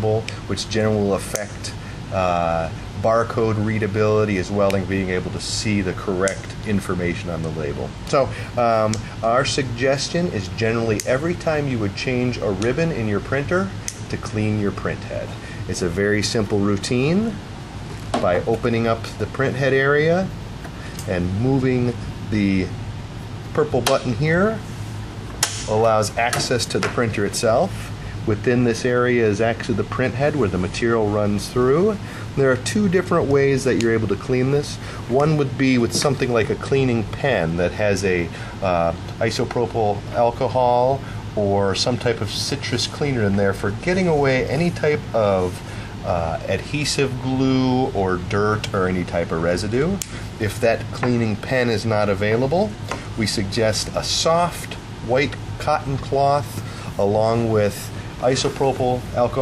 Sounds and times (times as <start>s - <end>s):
Speech: 0.0s - 17.4s, 18.1s - 20.4s, 21.0s - 22.8s, 23.5s - 24.7s, 25.6s - 59.4s.